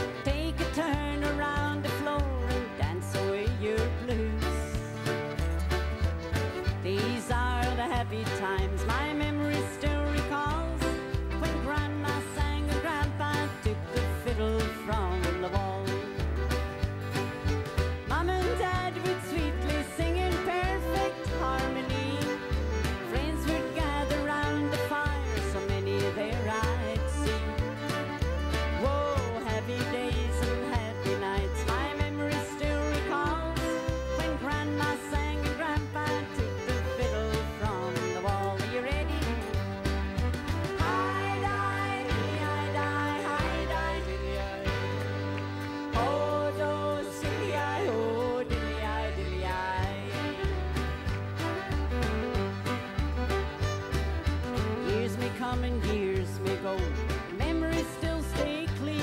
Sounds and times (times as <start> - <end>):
Violin, fiddle: 0.0 - 59.0.